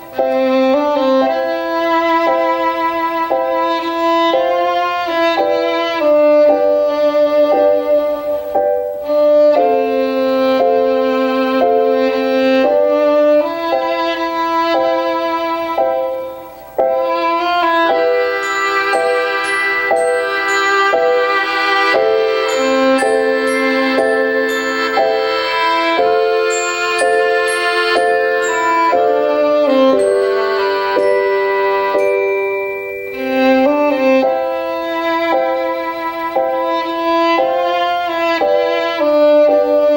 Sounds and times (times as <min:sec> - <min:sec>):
Violin, fiddle: 0:00.0 - 0:39.9.